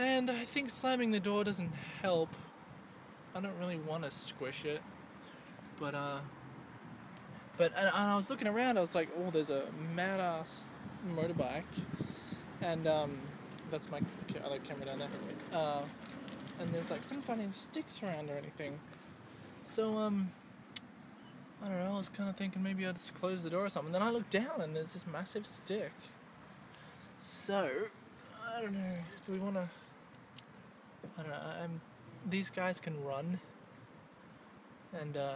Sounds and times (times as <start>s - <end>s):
Speech: 0.0s - 2.5s, 3.4s - 4.8s, 5.8s - 6.3s, 7.6s - 11.8s, 12.6s - 16.0s, 16.6s - 18.8s, 19.7s - 20.4s, 21.6s - 26.1s, 27.2s - 29.8s, 31.1s - 33.5s, 35.0s - 35.3s.